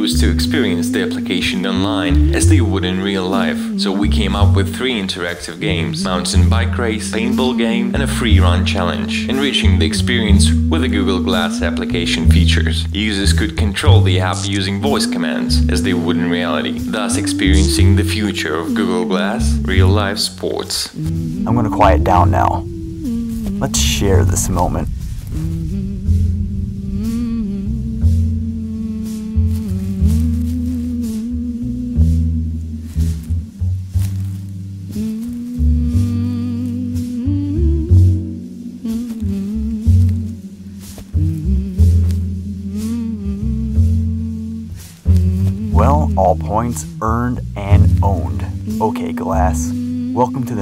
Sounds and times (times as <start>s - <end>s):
Speech: 0.0s - 22.6s, 23.6s - 24.9s, 45.7s - 50.6s
Music: 0.0s - 50.6s.